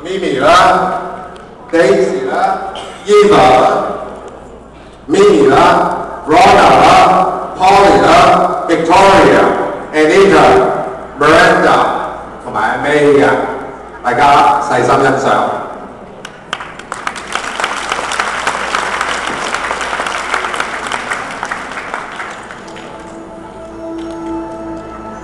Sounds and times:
Speech: 0.0s - 1.1s, 1.7s - 4.1s, 5.1s - 15.7s.

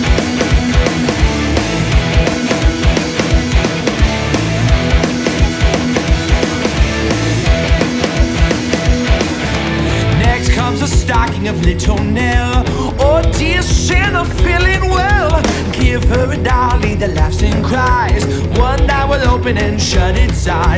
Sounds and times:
Dance music: 0.0s - 18.0s
Funk: 0.0s - 20.7s.

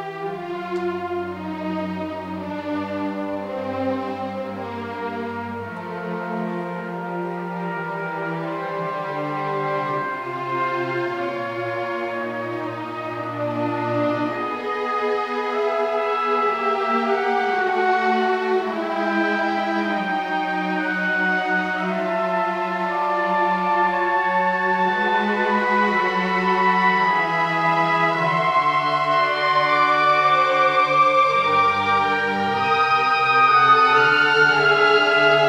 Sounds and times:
Violin, fiddle: 0.0s - 35.4s.

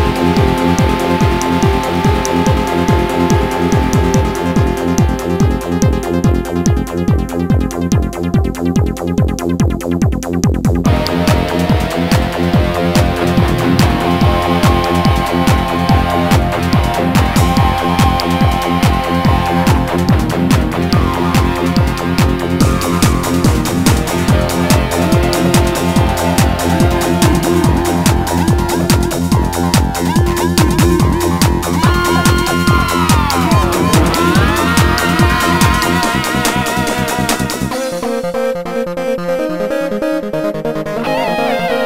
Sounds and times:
Techno: 0.0s - 41.8s
Strum: 10.9s - 38.2s.

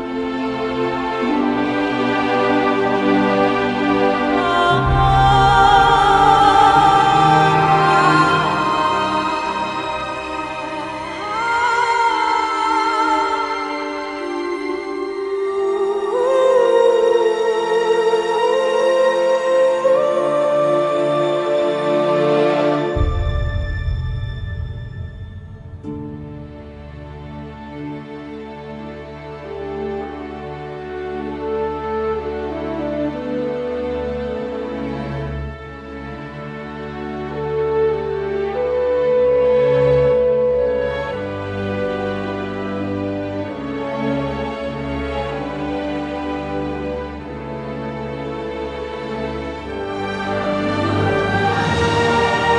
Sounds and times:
Music: 0.0s - 52.5s.

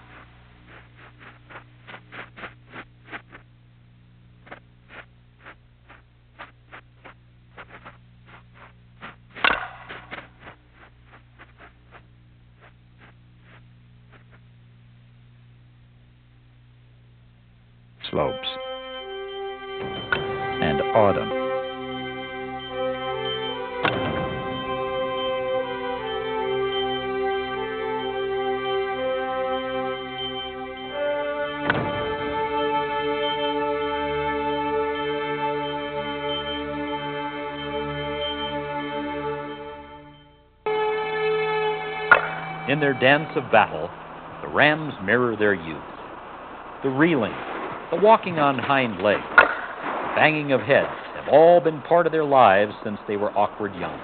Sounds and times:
Speech: 18.0s - 18.6s, 20.6s - 21.4s, 42.7s - 45.9s, 46.8s - 49.3s, 50.2s - 54.0s
Music: 18.0s - 44.1s.

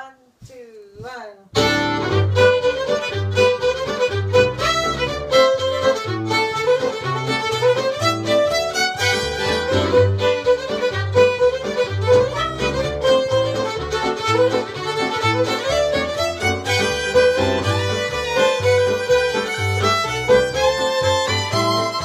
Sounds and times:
Violin, fiddle: 1.6s - 22.0s.

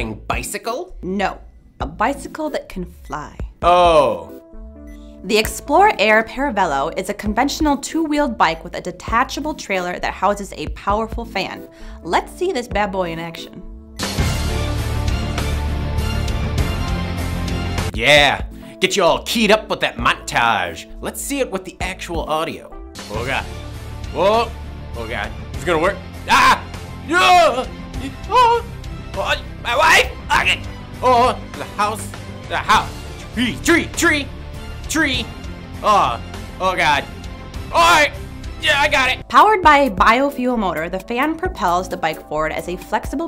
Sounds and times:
Speech: 0.0s - 4.3s, 5.3s - 13.6s, 18.0s - 23.4s, 37.8s - 43.2s
Music: 0.0s - 43.2s.

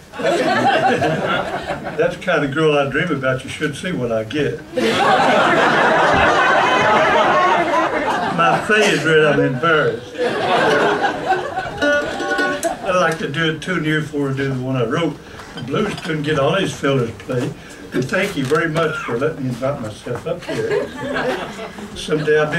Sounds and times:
Speech: 2.0s - 4.7s, 8.3s - 10.2s, 12.9s - 20.9s, 21.9s - 22.5s
Music: 11.8s - 12.8s.

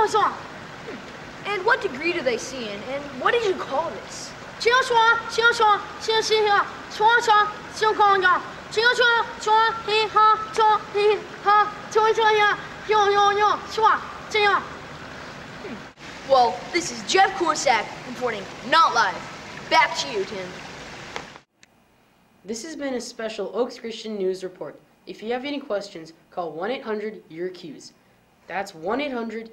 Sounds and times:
Speech: 0.0s - 14.7s, 15.7s - 20.6s, 22.5s - 29.5s
Stream: 0.0s - 21.5s.

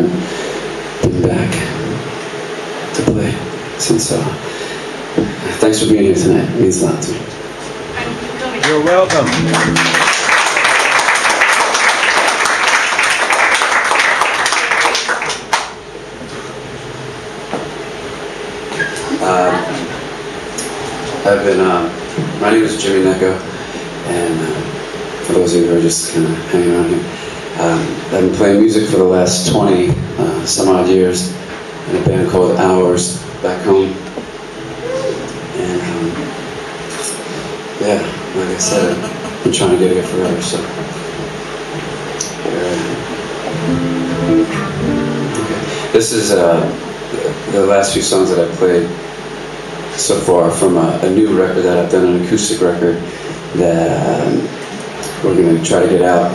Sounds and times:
Speech: 1.0s - 2.0s, 3.0s - 4.4s, 5.5s - 7.3s, 19.1s - 20.0s, 21.2s - 34.0s, 35.6s - 36.3s, 37.8s - 40.8s, 42.3s - 43.0s, 45.9s - 49.0s, 50.0s - 56.3s.

